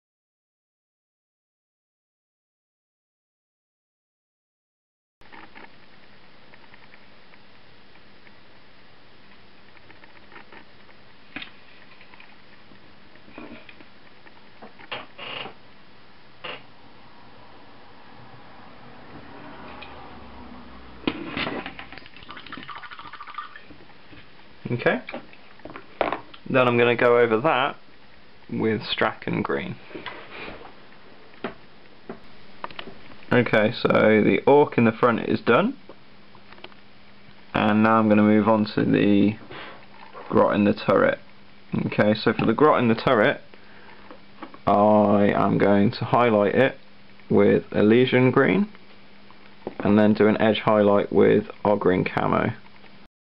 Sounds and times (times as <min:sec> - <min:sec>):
Inside, small room: 0:05.2 - 0:53.1.